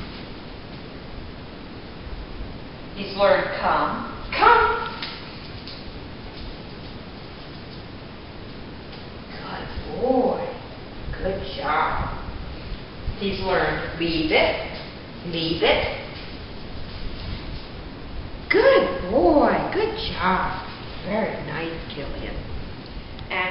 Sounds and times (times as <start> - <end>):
Speech: 3.0 - 5.0, 9.3 - 10.6, 11.2 - 12.2, 13.2 - 16.1, 18.5 - 22.5.